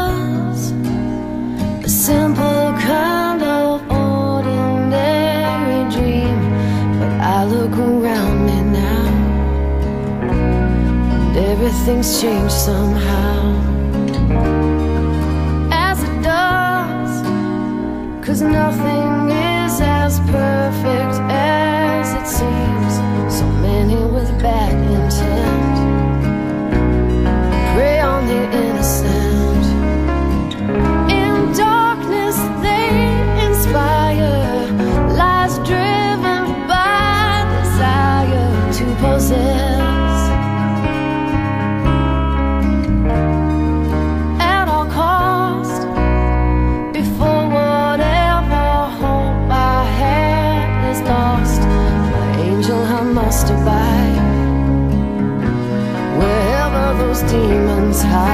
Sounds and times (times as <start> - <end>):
Music: 0.0 - 58.3.